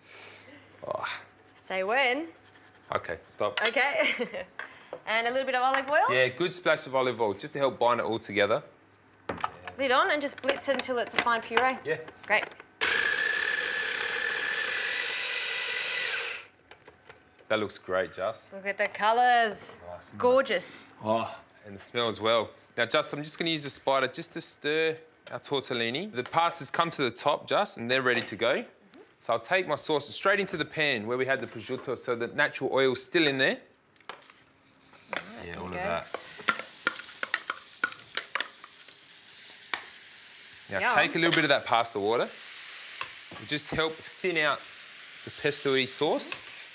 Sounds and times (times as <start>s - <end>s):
Sizzle: 35.7s - 46.7s
Stir: 36.0s - 38.7s.